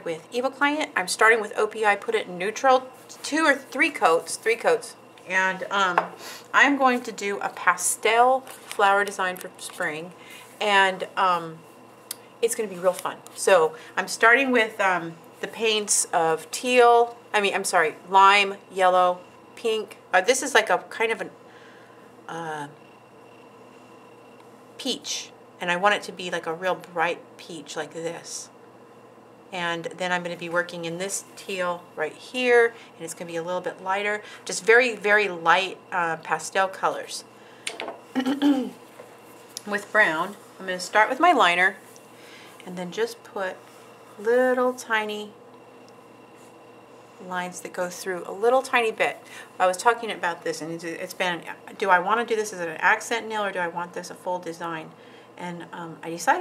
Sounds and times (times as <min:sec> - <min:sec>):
Speech: 0:00.0 - 0:11.6, 0:12.4 - 0:21.4, 0:24.8 - 0:28.5, 0:29.5 - 0:37.3, 0:39.6 - 0:41.8, 0:42.6 - 0:43.6, 0:44.2 - 0:45.4, 0:47.2 - 0:56.4.